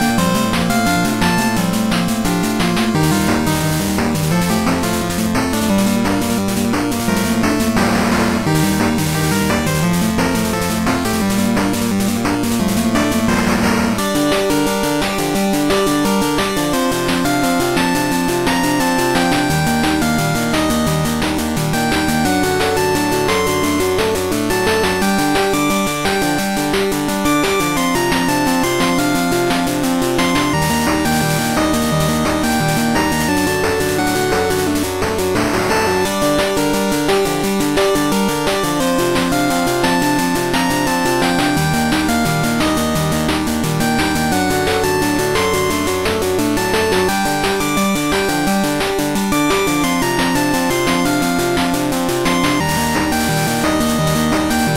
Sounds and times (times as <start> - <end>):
Music: 0.0 - 54.7.